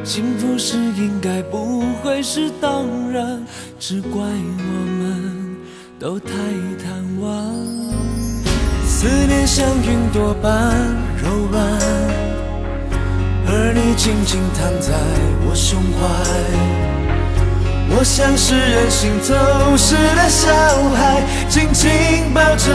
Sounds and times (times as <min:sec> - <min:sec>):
Music: 0:00.0 - 0:22.7.